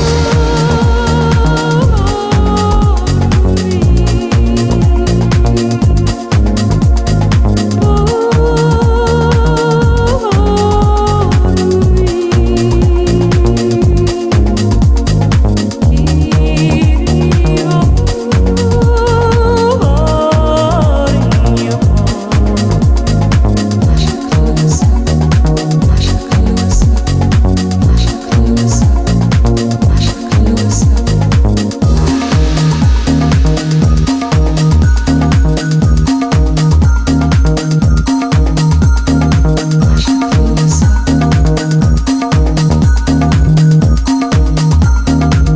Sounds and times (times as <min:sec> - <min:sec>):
Music: 0:00.0 - 0:45.5.